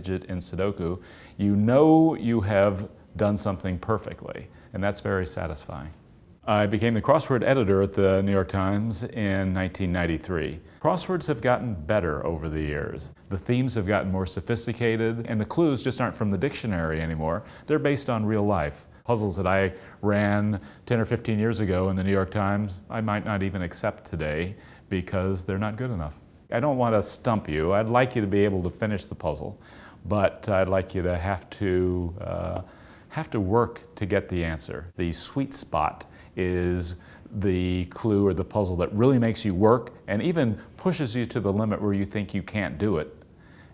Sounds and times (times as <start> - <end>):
Speech: 0.0 - 43.2.